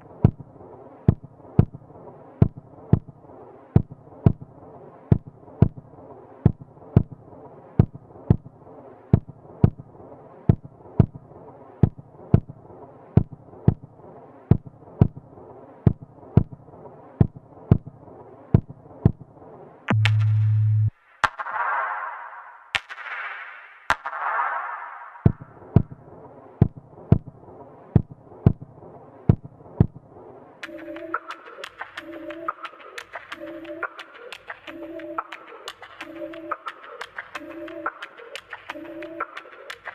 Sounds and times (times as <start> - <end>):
Music: 0.0 - 39.9.